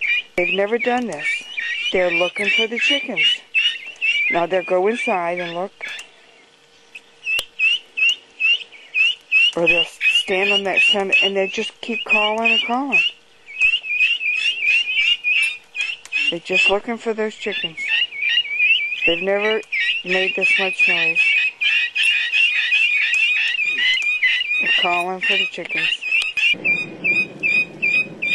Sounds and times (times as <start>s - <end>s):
Cluck: 19.8s - 26.6s.